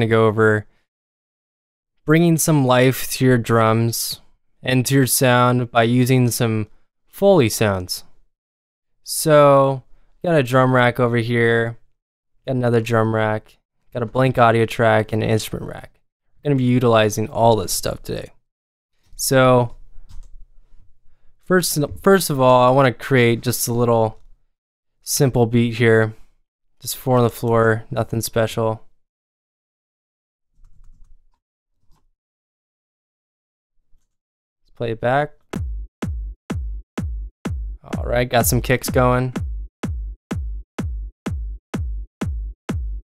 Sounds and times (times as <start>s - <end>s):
Speech: 0.0s - 0.7s, 2.0s - 8.1s, 9.1s - 11.9s, 12.5s - 18.4s, 19.2s - 19.8s, 21.5s - 24.2s, 25.0s - 26.2s, 26.8s - 28.9s, 34.8s - 35.4s, 37.8s - 39.4s.